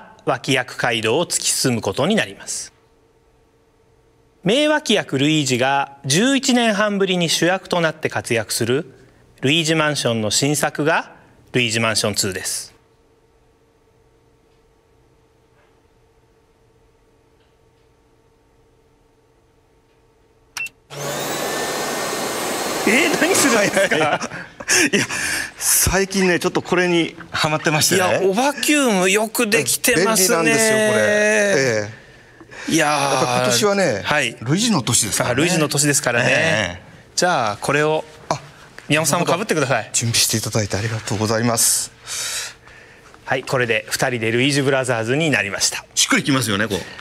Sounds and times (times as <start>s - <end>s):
Speech: 0.0s - 2.8s, 4.4s - 12.8s, 22.9s - 24.2s, 25.6s - 32.0s, 32.7s - 42.0s, 43.3s - 47.0s.